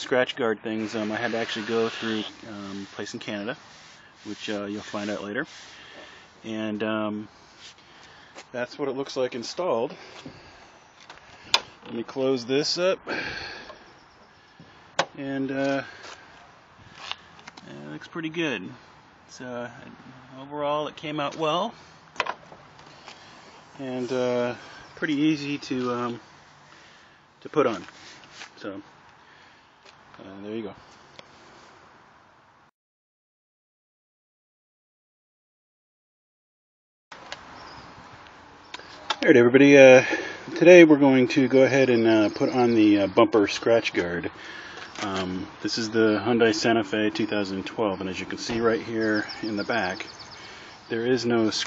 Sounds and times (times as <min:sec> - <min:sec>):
Speech: 0:00.0 - 0:03.6, 0:04.2 - 0:05.5, 0:06.4 - 0:07.3, 0:08.5 - 0:10.0, 0:11.9 - 0:13.1, 0:15.2 - 0:15.9, 0:17.6 - 0:21.8, 0:23.8 - 0:26.2, 0:27.4 - 0:27.9, 0:28.6 - 0:28.9, 0:30.2 - 0:30.8, 0:39.2 - 0:44.4, 0:45.0 - 0:50.1, 0:50.9 - 0:51.6.